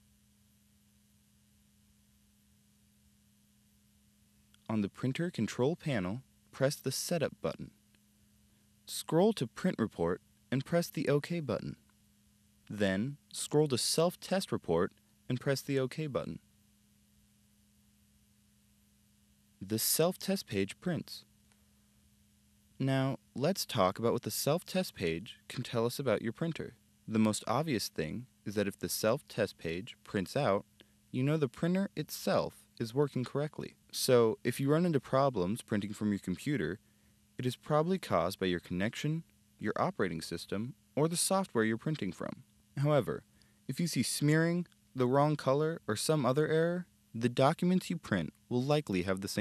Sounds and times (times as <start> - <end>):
Speech: 4.6 - 7.8, 8.9 - 11.8, 12.7 - 16.4, 19.6 - 21.3, 22.8 - 36.8, 37.4 - 49.4.